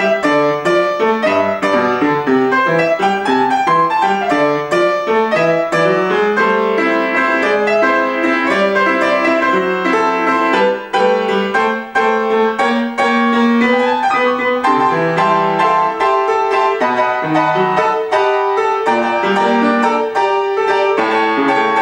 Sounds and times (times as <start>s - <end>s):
Music: 0.0s - 21.8s.